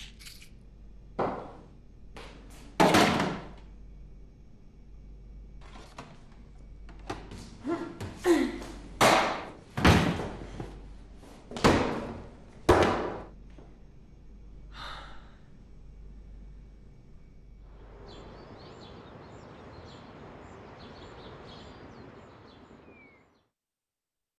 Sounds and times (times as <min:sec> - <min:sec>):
Bird: 0:18.0 - 0:23.4.